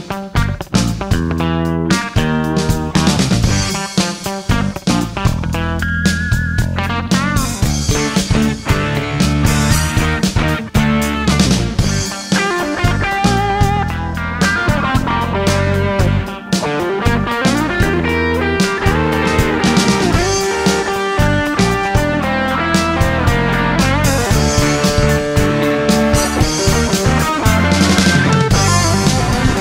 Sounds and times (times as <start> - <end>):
Music: 0.0 - 29.6.